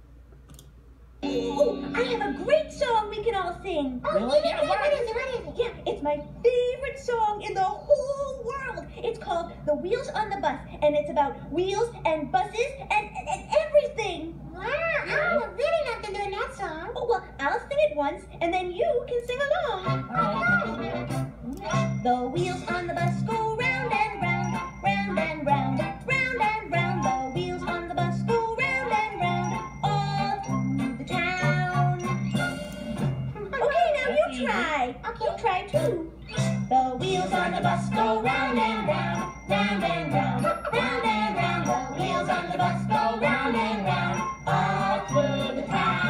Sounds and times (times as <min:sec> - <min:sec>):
Music: 0:19.8 - 0:33.5, 0:35.8 - 0:46.1.